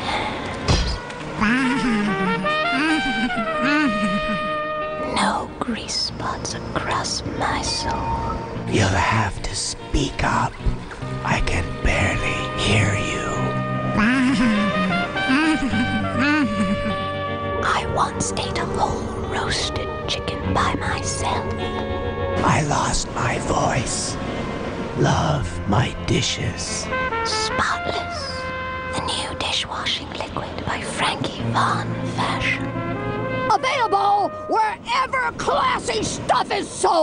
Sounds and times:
Music: 0:00.0 - 0:37.0.

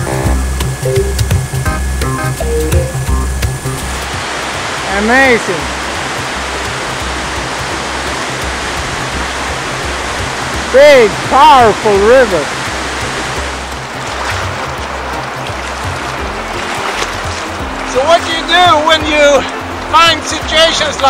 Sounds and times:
Stream: 0:00.0 - 0:21.1
Waterfall: 0:00.0 - 0:21.1
Speech: 0:04.9 - 0:05.7, 0:10.7 - 0:12.5, 0:17.9 - 0:21.1.

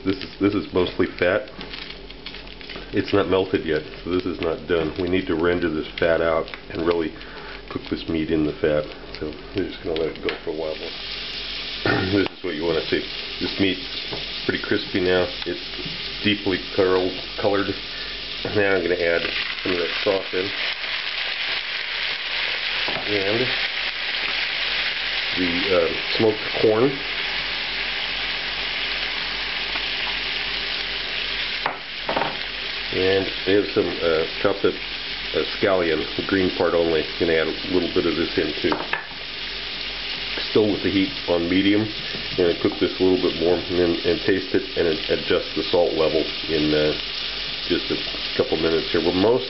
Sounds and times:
Speech: 0:00.0 - 0:01.5, 0:02.9 - 0:11.0, 0:11.9 - 0:13.9, 0:14.5 - 0:17.8, 0:18.5 - 0:20.6, 0:22.9 - 0:23.6, 0:25.4 - 0:27.1, 0:32.9 - 0:38.9, 0:40.4 - 0:47.0, 0:47.7 - 0:49.5
Frying (food): 0:00.0 - 0:49.5.

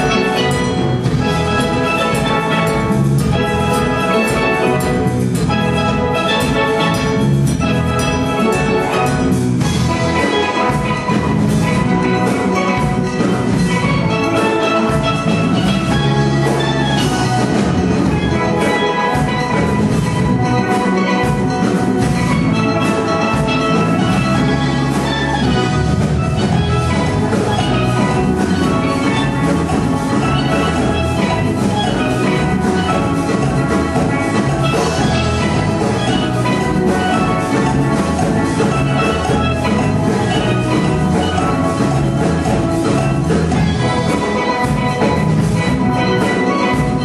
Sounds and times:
Drum: 0:00.0 - 0:47.0
Steelpan: 0:00.0 - 0:47.0.

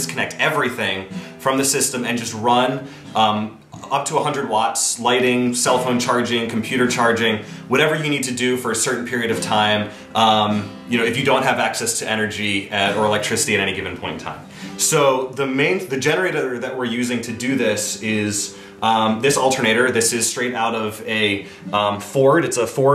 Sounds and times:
Music: 0:00.0 - 0:22.9
Speech: 0:00.0 - 0:22.9.

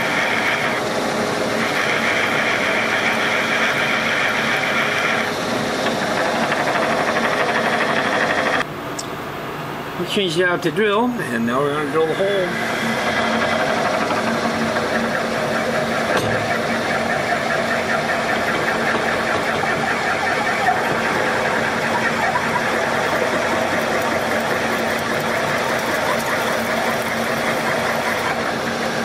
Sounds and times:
Speech: 0:10.0 - 0:12.6.

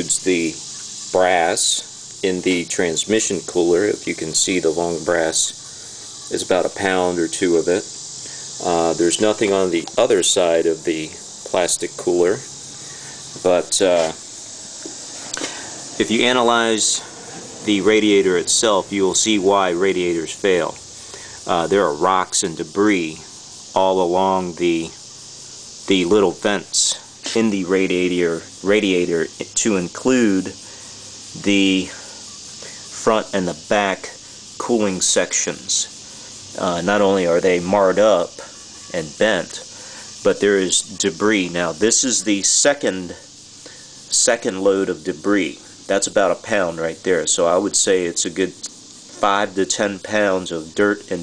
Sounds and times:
Speech: 0:00.0 - 0:00.6, 0:01.2 - 0:05.6, 0:06.3 - 0:07.9, 0:08.6 - 0:12.5, 0:13.4 - 0:14.2, 0:16.0 - 0:20.8, 0:21.5 - 0:25.0, 0:25.9 - 0:30.6, 0:31.4 - 0:32.0, 0:33.0 - 0:35.9, 0:36.6 - 0:43.3, 0:44.1 - 0:51.2.

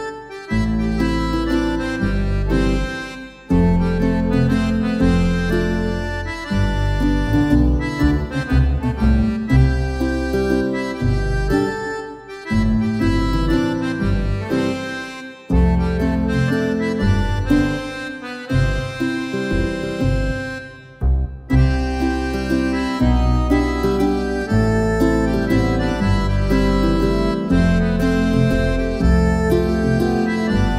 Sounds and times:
Accordion: 0:00.0 - 0:30.7.

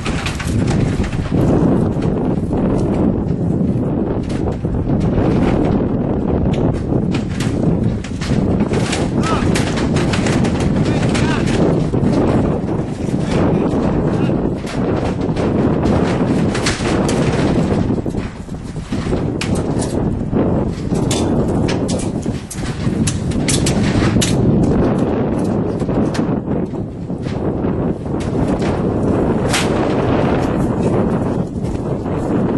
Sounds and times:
Speech: 0:09.2 - 0:09.5, 0:10.9 - 0:11.5, 0:13.3 - 0:14.4.

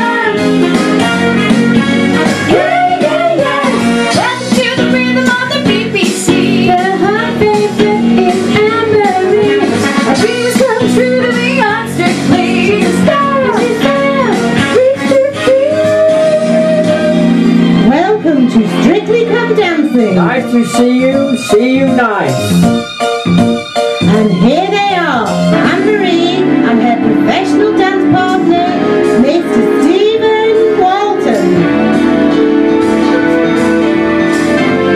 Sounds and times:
Blues: 0:00.0 - 0:34.9
Speech: 0:17.8 - 0:22.5, 0:24.0 - 0:31.6.

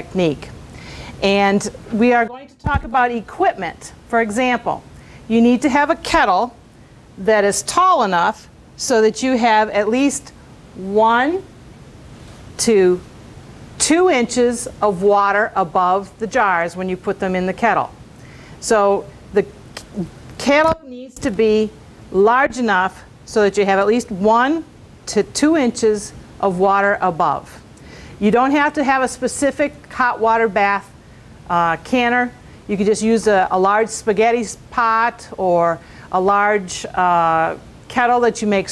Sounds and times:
Speech: 0:00.0 - 0:00.5, 0:01.2 - 0:06.6, 0:07.2 - 0:11.4, 0:12.6 - 0:13.0, 0:13.8 - 0:17.9, 0:18.6 - 0:27.6, 0:28.2 - 0:30.9, 0:31.5 - 0:38.7.

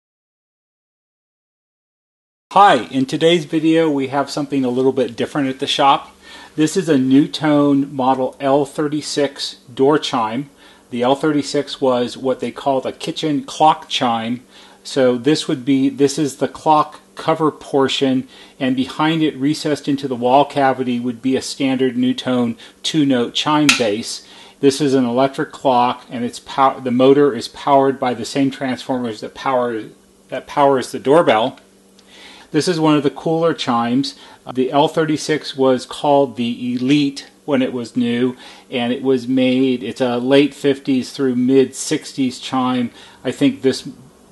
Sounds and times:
Speech: 0:02.5 - 0:31.7, 0:32.5 - 0:44.1.

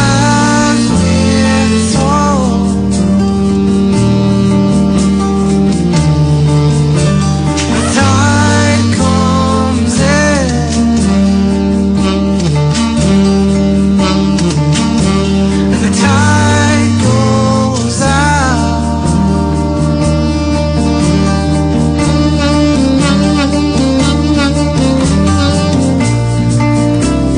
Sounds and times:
Guitar: 0:00.0 - 0:27.3.

